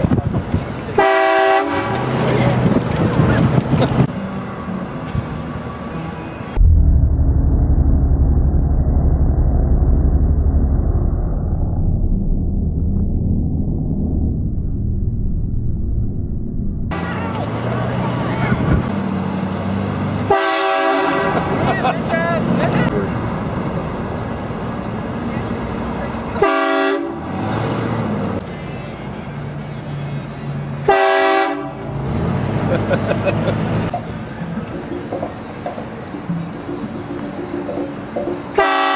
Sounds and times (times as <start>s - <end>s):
Train horn: 1.0s - 2.1s, 20.3s - 21.5s, 26.4s - 27.3s, 30.8s - 31.9s, 38.6s - 38.9s.